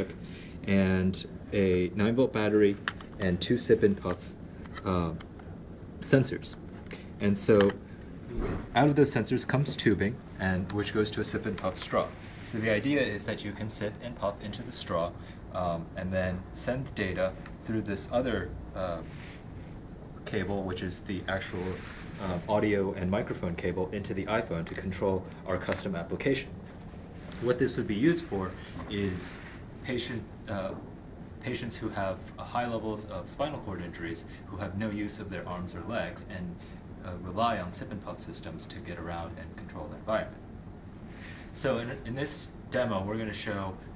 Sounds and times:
Speech: 0:00.0 - 0:05.3, 0:06.0 - 0:07.8, 0:08.4 - 0:19.2, 0:20.2 - 0:26.6, 0:27.3 - 0:40.4, 0:41.5 - 0:43.9.

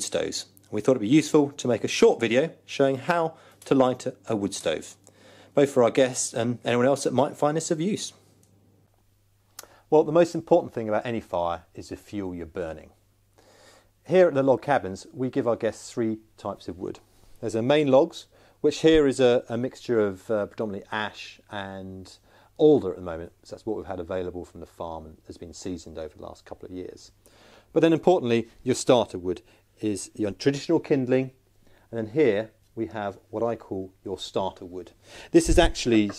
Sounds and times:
Speech: 0:00.0 - 0:05.0, 0:05.6 - 0:08.2, 0:09.9 - 0:13.0, 0:14.0 - 0:36.1.

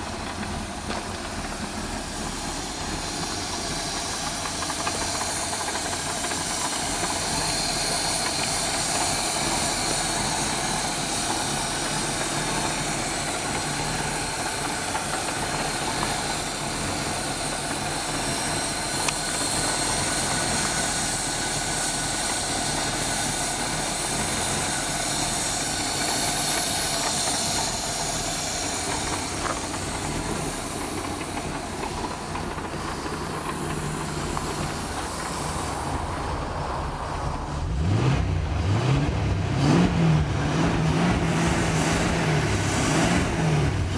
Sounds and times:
Idling: 0:00.0 - 0:43.9
Vehicle: 0:00.0 - 0:43.9.

